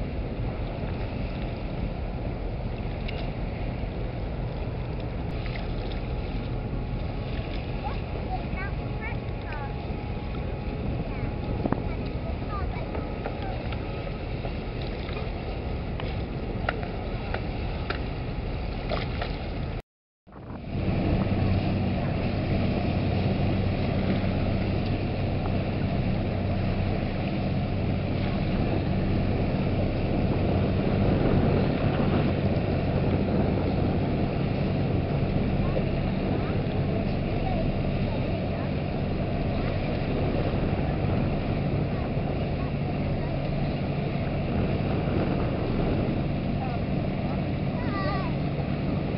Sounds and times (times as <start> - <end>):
Motorboat, speedboat: 0.0 - 49.1.